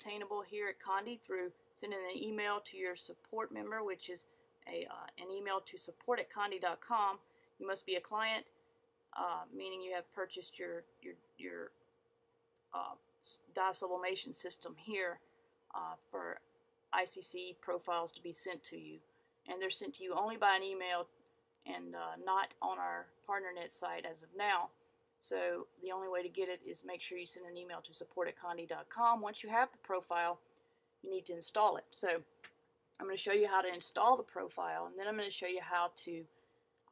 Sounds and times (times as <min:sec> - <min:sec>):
Speech: 0:00.0 - 0:08.5, 0:09.2 - 0:11.7, 0:12.8 - 0:16.4, 0:17.0 - 0:30.4, 0:31.0 - 0:32.3, 0:33.0 - 0:36.3.